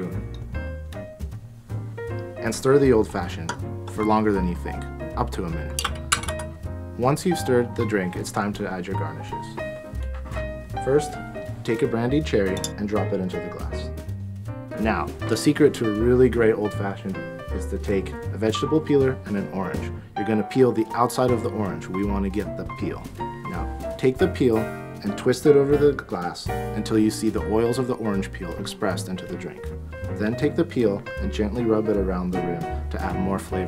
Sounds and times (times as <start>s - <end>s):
Music: 0.0s - 33.6s
Speech: 2.4s - 5.8s, 7.0s - 9.6s, 10.8s - 14.0s, 14.8s - 29.6s, 30.2s - 33.6s.